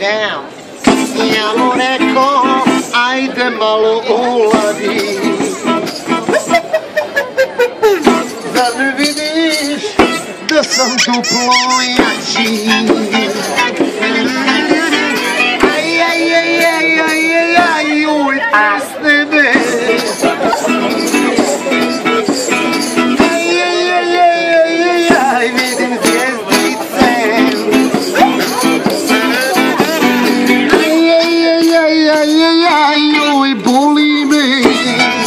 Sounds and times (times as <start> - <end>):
Music: 0.8 - 35.2.